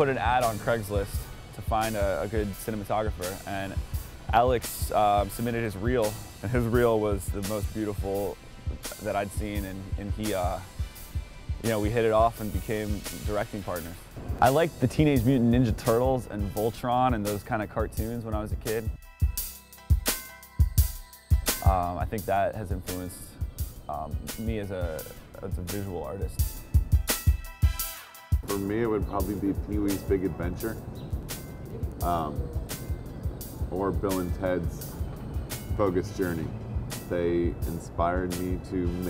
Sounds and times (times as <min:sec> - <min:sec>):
Speech: 0:00.0 - 0:10.7, 0:11.6 - 0:19.0, 0:21.6 - 0:26.4, 0:28.5 - 0:30.8, 0:32.0 - 0:32.5, 0:33.7 - 0:34.8, 0:35.8 - 0:36.5, 0:37.1 - 0:39.1
Music: 0:00.0 - 0:39.1.